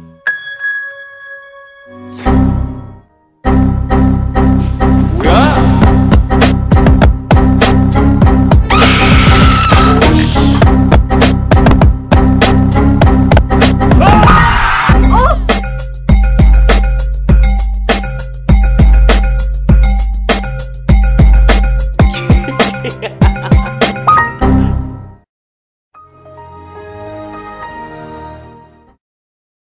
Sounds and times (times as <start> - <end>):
Music: 0.0 - 25.3, 26.0 - 29.0.